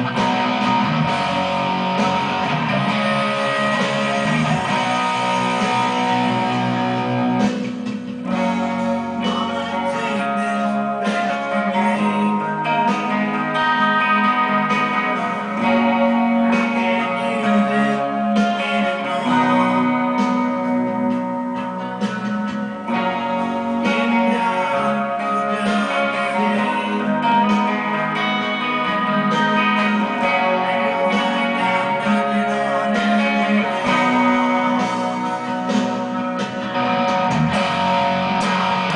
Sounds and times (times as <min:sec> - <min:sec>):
Bass guitar: 0:00.0 - 0:38.9
Electric guitar: 0:00.0 - 0:38.9
Strum: 0:00.0 - 0:38.9.